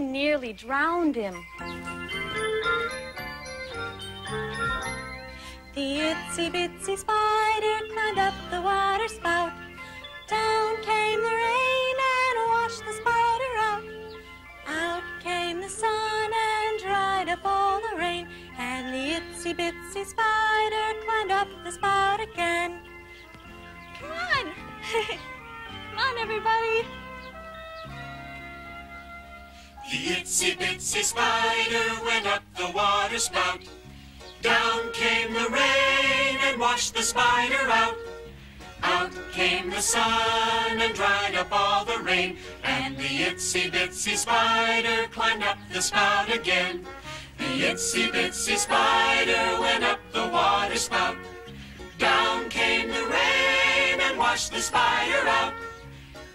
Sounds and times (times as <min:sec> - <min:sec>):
Music: 0:00.0 - 0:56.3.